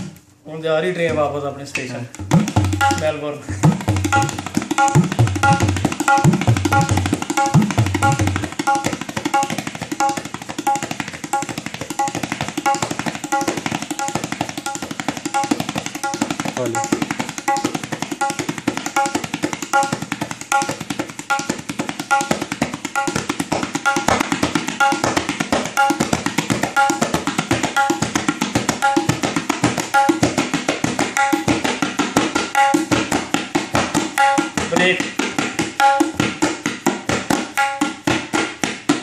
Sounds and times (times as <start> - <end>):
Tabla: 0.0 - 0.2, 1.0 - 39.0.